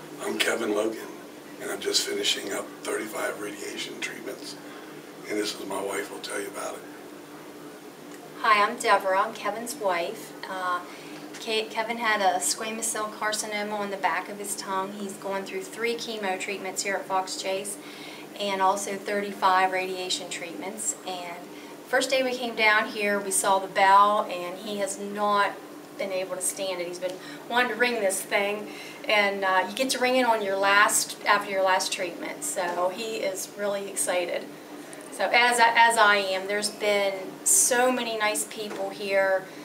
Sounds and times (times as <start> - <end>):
Speech: 0.2 - 4.6, 5.3 - 6.8, 8.4 - 10.8, 11.4 - 17.8, 18.4 - 34.4, 35.1 - 39.4.